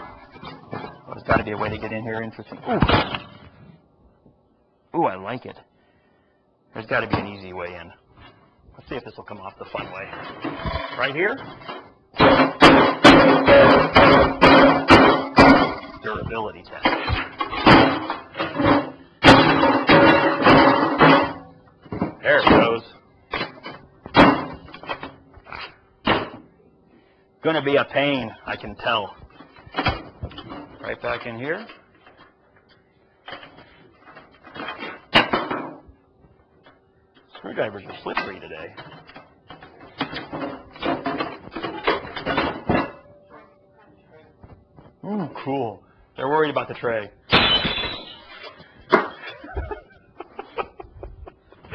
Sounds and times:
Speech: 1.1 - 2.9, 4.9 - 5.6, 6.7 - 8.0, 8.8 - 10.2, 16.0 - 17.0, 22.2 - 23.0, 27.4 - 29.2, 30.8 - 31.7, 37.3 - 38.8, 45.0 - 47.2.

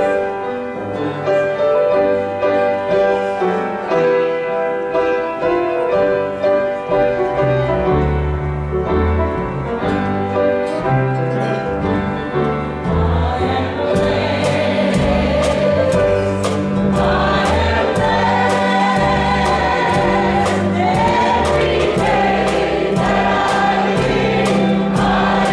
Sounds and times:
Classical music: 0.0 - 25.5
Wedding music: 0.0 - 25.5.

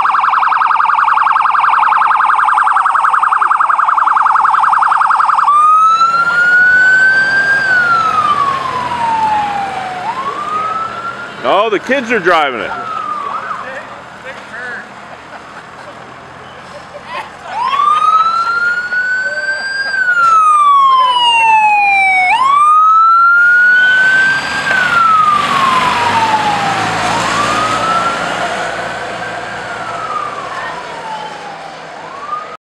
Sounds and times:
Fire engine, fire truck (siren): 0.0 - 14.0, 17.4 - 32.6.

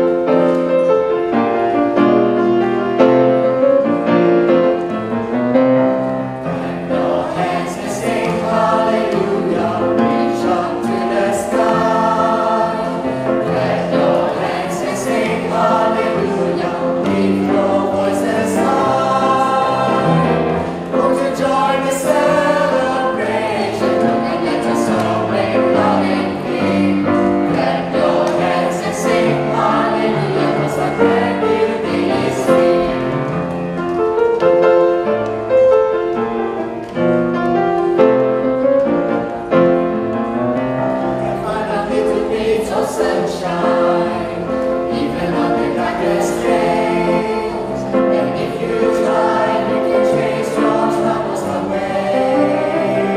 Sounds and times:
Gospel music: 0.0 - 53.1
Choir: 3.0 - 33.6, 39.5 - 53.1.

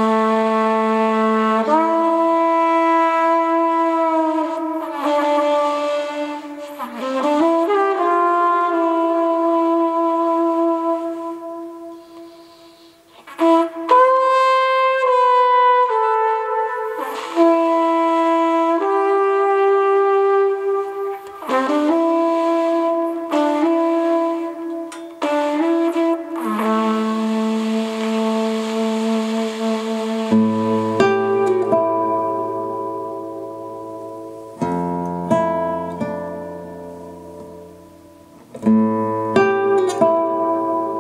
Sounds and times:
Inside, large room or hall: 0.0 - 35.1
Music: 0.0 - 41.0.

